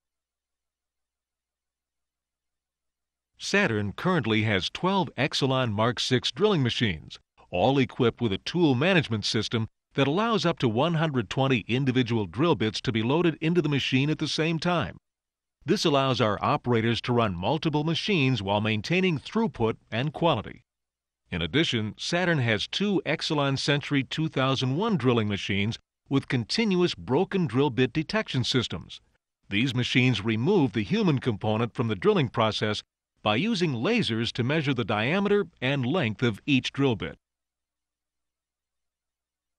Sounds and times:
Speech: 0:03.4 - 0:15.0, 0:15.6 - 0:20.6, 0:21.3 - 0:37.2.

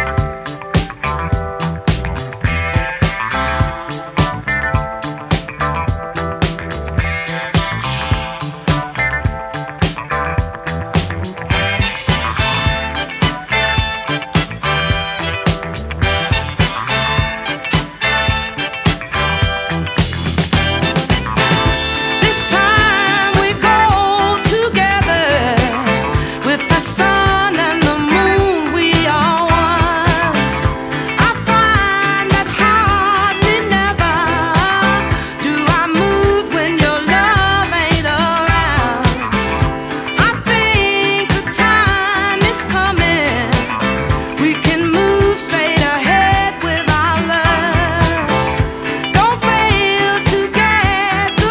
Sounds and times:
Music: 0:00.0 - 0:51.5.

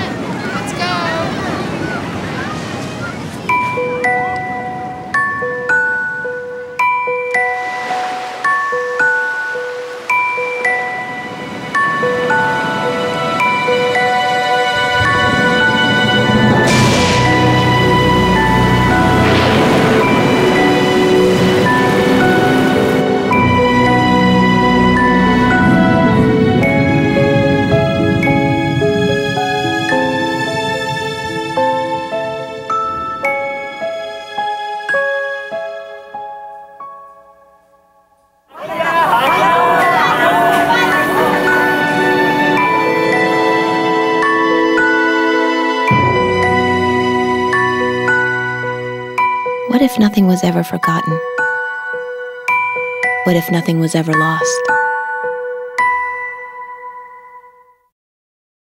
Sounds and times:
Music: 0:00.0 - 0:57.9.

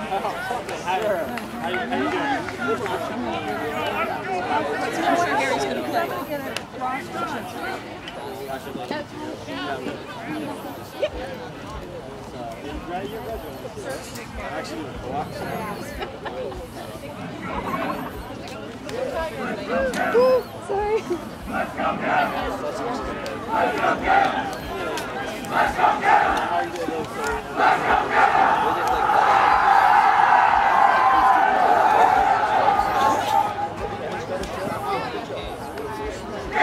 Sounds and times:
Speech: 0:00.0 - 0:36.6.

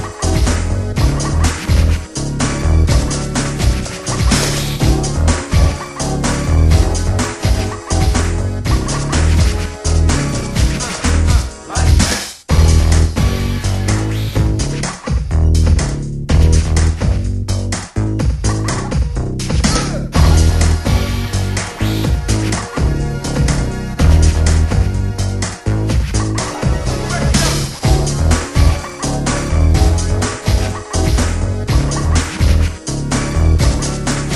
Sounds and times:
Music: 0:00.0 - 0:34.3.

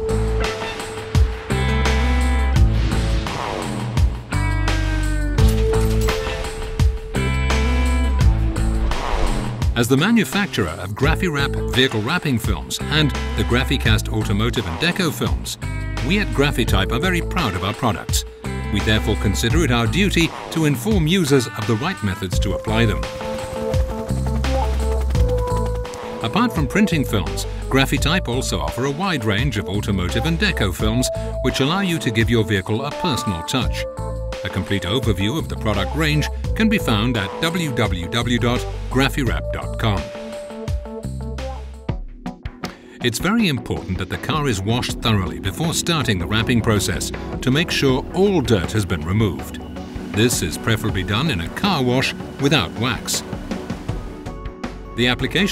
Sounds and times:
Music: 0:00.0 - 0:55.5
Speech: 0:09.8 - 0:23.1, 0:26.2 - 0:40.1, 0:43.0 - 0:53.2, 0:55.0 - 0:55.5.

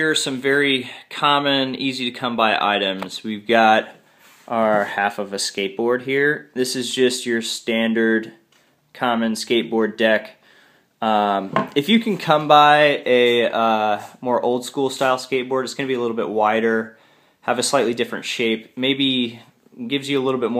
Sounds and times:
Speech: 0:00.0 - 0:10.4, 0:11.0 - 0:20.5.

